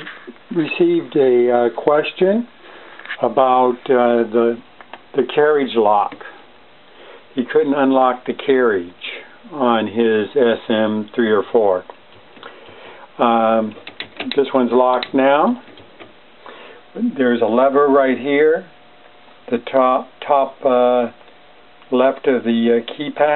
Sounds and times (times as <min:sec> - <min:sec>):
Speech: 0:00.0 - 0:02.5, 0:03.2 - 0:06.4, 0:07.4 - 0:11.9, 0:13.2 - 0:15.6, 0:16.9 - 0:18.8, 0:19.5 - 0:21.2, 0:21.9 - 0:23.3.